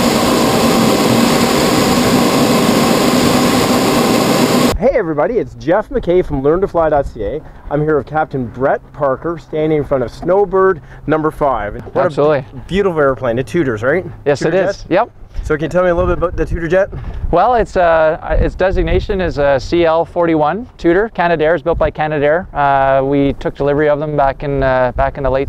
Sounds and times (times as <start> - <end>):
Speech: 4.8 - 25.4.